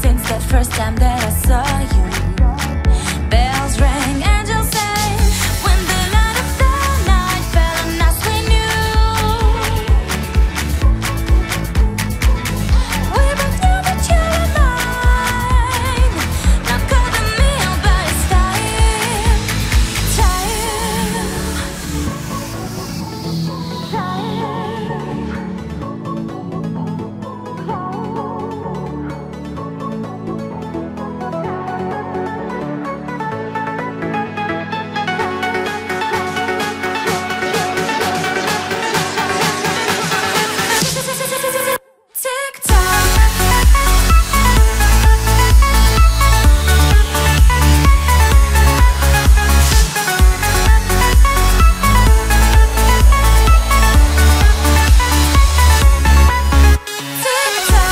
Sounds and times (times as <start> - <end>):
Music: 0.0 - 57.9.